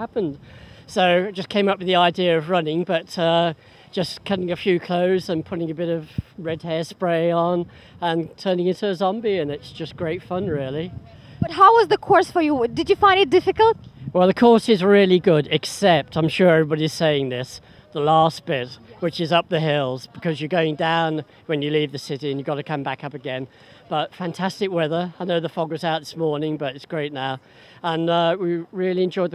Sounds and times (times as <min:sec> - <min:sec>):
Speech: 0:00.0 - 0:29.3.